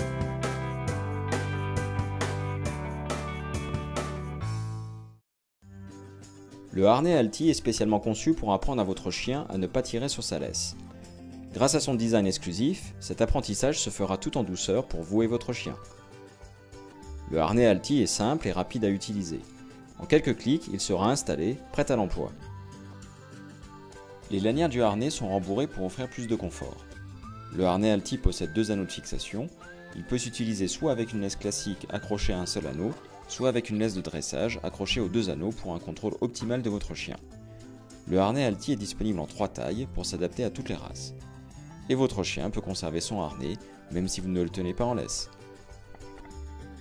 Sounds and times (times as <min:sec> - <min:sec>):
Music: 0:00.0 - 0:46.8
Speech: 0:06.7 - 0:10.8, 0:11.6 - 0:15.8, 0:17.3 - 0:19.4, 0:20.0 - 0:22.4, 0:24.3 - 0:26.8, 0:27.6 - 0:37.2, 0:38.1 - 0:41.2, 0:41.8 - 0:45.3.